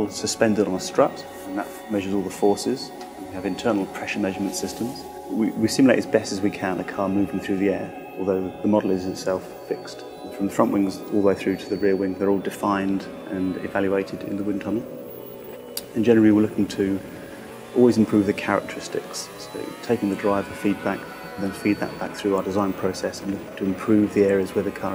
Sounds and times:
Speech: 0.0s - 14.9s, 15.8s - 17.1s, 17.7s - 24.9s
Music: 0.0s - 24.9s.

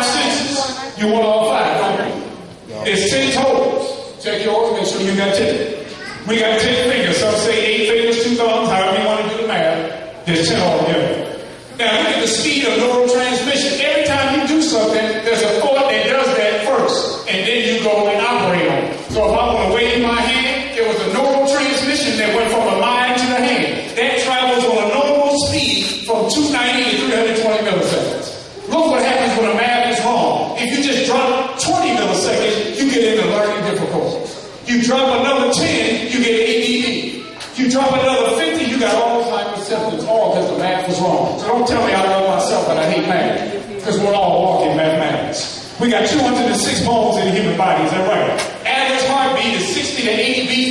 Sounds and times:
Male speech, man speaking: 0.0s - 50.7s.

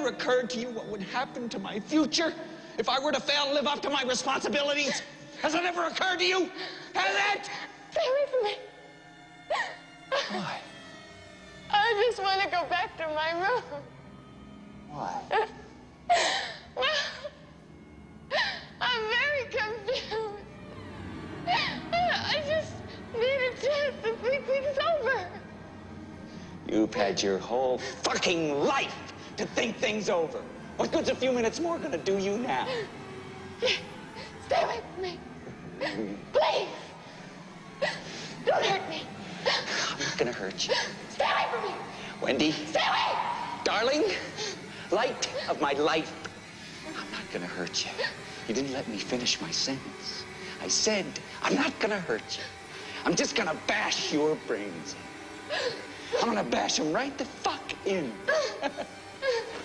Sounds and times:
Music: 0.0s - 59.6s.

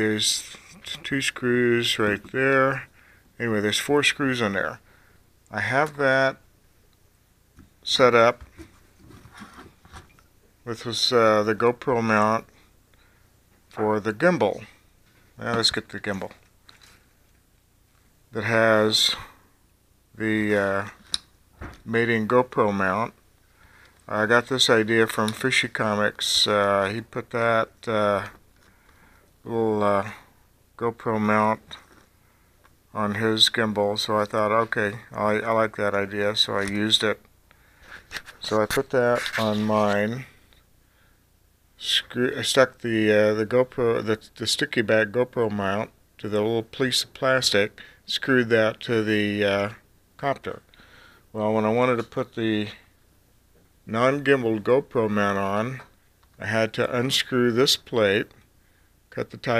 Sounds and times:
Speech: 0.0s - 4.8s, 5.5s - 6.5s, 7.8s - 8.5s, 10.6s - 12.5s, 13.7s - 14.8s, 15.4s - 16.4s, 18.3s - 19.4s, 20.2s - 21.0s, 21.7s - 23.2s, 24.1s - 28.4s, 29.4s - 31.9s, 32.9s - 37.3s, 38.4s - 40.4s, 41.8s - 50.7s, 51.3s - 52.9s, 53.8s - 58.4s, 59.1s - 59.5s.

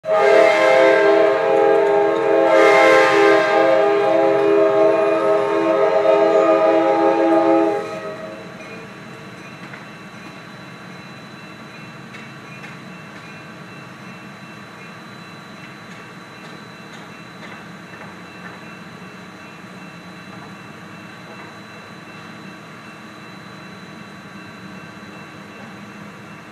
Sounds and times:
Train horn: 0.0s - 8.6s
Train whistle: 0.0s - 8.9s
Outside, urban or manmade: 0.0s - 26.5s.

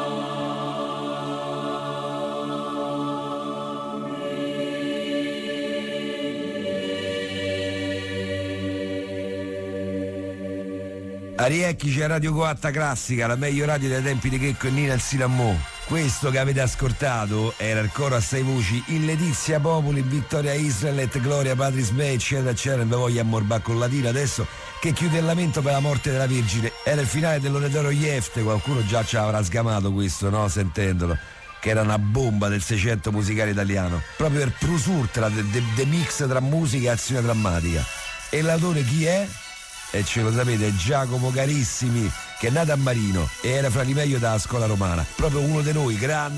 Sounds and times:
Music: 0.0s - 46.3s
Speech: 11.4s - 39.4s, 40.0s - 46.3s.

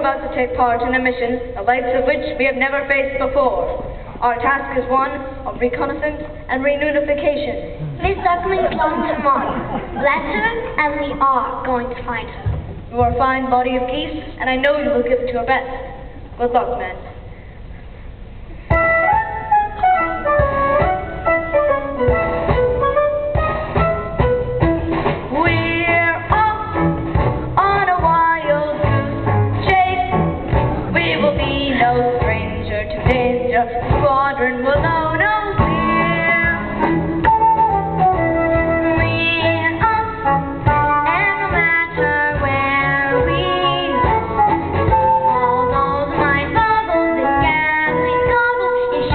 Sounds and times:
Speech: 0.0s - 17.2s
Classical music: 18.7s - 27.6s.

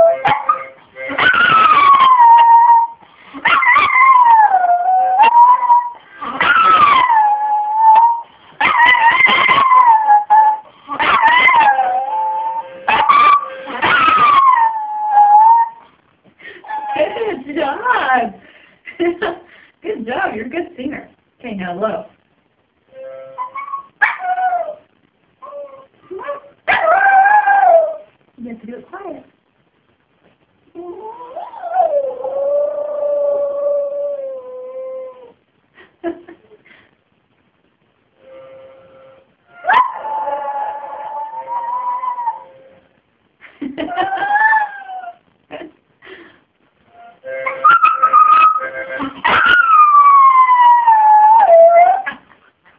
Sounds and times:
Music: 0.0s - 2.0s, 11.4s - 14.2s, 22.9s - 23.6s, 38.2s - 39.9s, 46.9s - 49.1s
Speech: 17.0s - 18.4s, 19.2s - 22.2s, 28.4s - 29.3s.

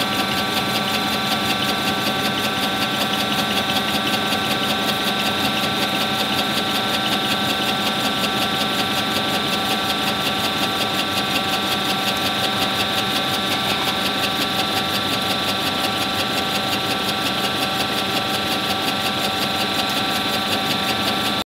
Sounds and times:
Idling: 0.0s - 21.4s.

